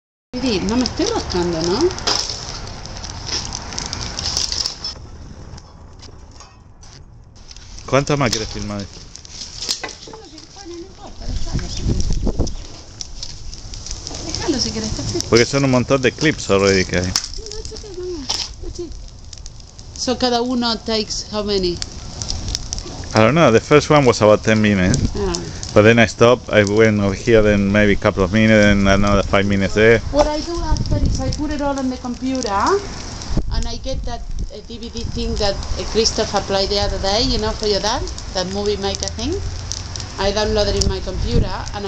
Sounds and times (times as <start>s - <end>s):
Fire: 0.3s - 41.8s
Outside, rural or natural: 0.3s - 41.8s.